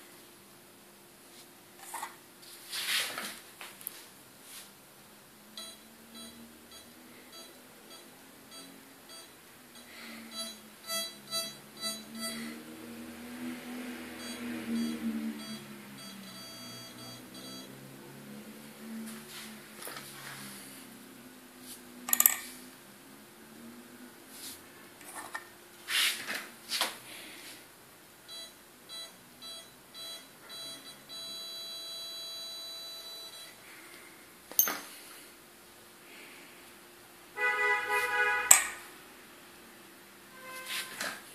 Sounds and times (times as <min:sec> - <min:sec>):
Beep, bleep: 0:05.6 - 0:12.4, 0:14.2 - 0:17.8, 0:28.3 - 0:33.6.